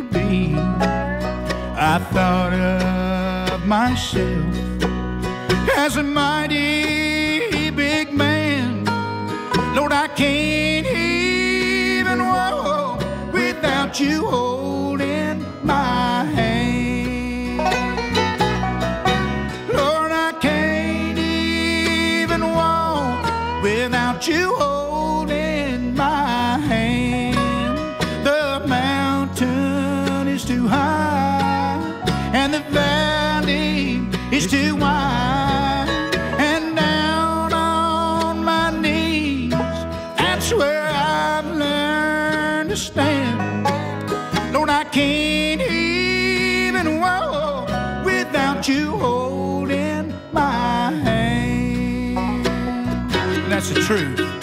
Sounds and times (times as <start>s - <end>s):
Music: 0.0s - 54.4s.